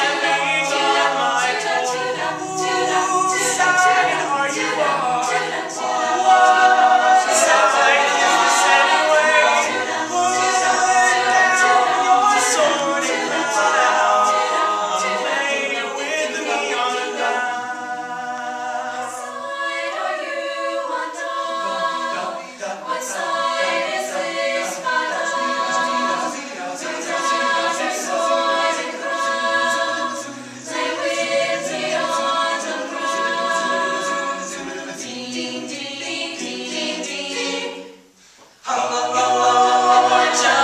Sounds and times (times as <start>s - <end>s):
A capella: 0.0s - 40.6s
Choir: 0.0s - 40.6s.